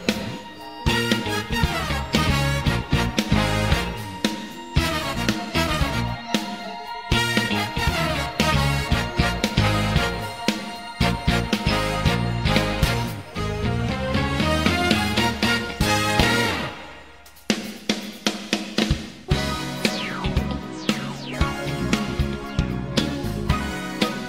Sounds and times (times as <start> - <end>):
Theme music: 0.0 - 17.6, 19.3 - 24.2.